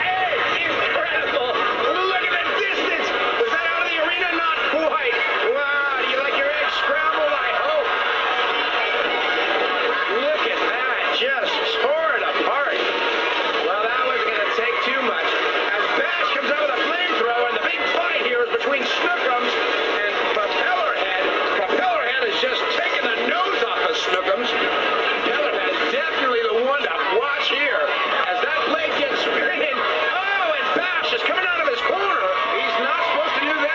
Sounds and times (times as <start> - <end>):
Speech: 0.0 - 8.0, 10.0 - 12.8, 13.6 - 33.7.